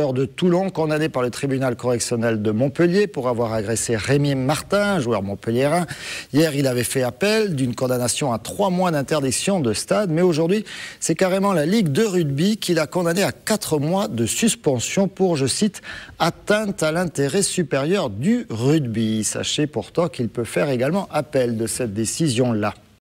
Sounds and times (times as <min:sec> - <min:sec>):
Speech: 0:00.0 - 0:23.0.